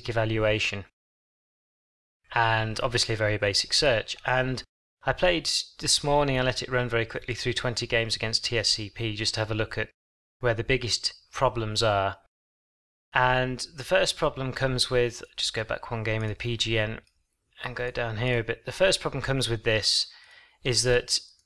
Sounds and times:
Speech: 0:00.0 - 0:00.9, 0:02.3 - 0:12.3, 0:13.2 - 0:21.4.

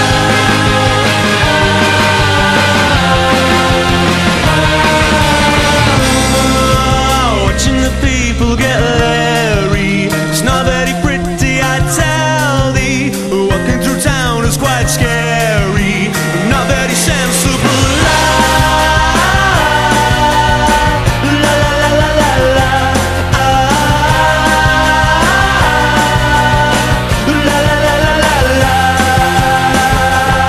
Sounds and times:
Singing: 0:00.0 - 0:30.4.

